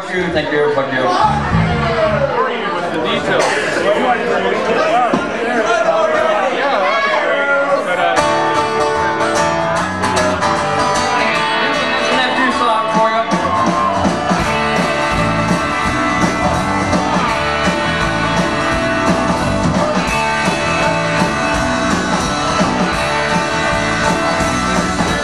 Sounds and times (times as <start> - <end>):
Speech: 0.0 - 8.4, 11.3 - 13.5
Music: 1.2 - 2.4, 8.2 - 25.2.